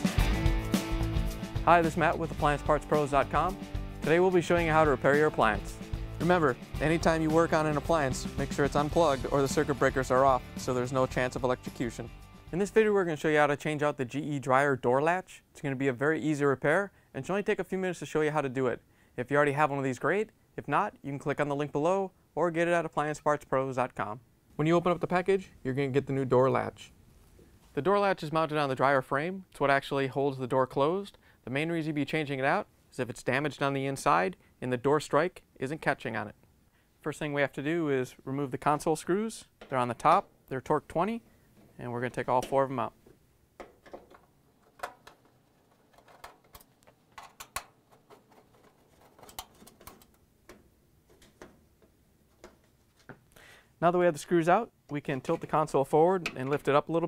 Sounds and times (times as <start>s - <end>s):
Speech: 1.6s - 26.9s, 27.8s - 36.4s, 37.0s - 41.2s, 41.8s - 43.0s, 53.8s - 57.0s.